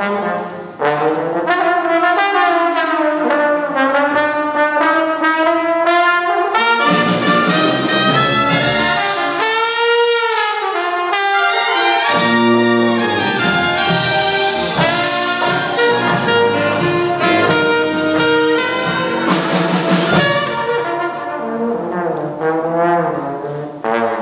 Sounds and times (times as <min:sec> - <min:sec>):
Music: 0:00.0 - 0:24.2.